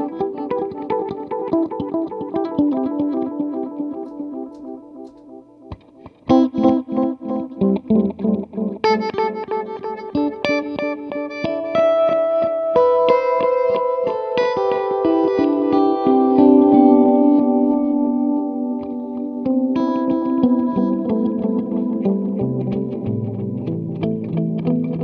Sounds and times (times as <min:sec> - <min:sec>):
Effects unit: 0:00.0 - 0:25.0
Guitar: 0:00.0 - 0:25.0.